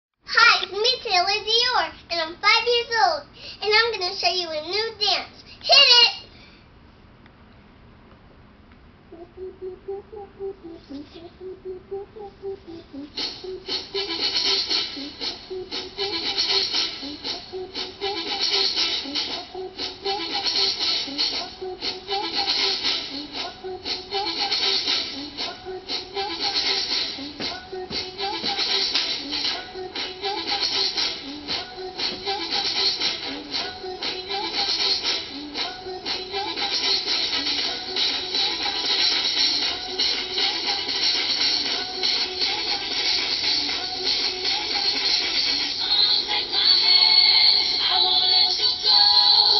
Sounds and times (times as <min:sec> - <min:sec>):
Child speech, kid speaking: 0:00.3 - 0:06.3.